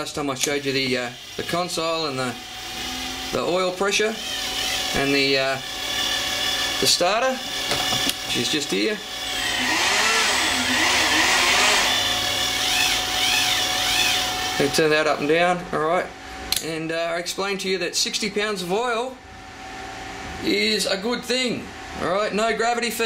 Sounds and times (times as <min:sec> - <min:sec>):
Speech: 0:00.0 - 0:02.4, 0:03.4 - 0:04.2, 0:05.0 - 0:05.6, 0:06.8 - 0:07.4, 0:08.3 - 0:09.0, 0:14.6 - 0:19.2, 0:20.4 - 0:23.0.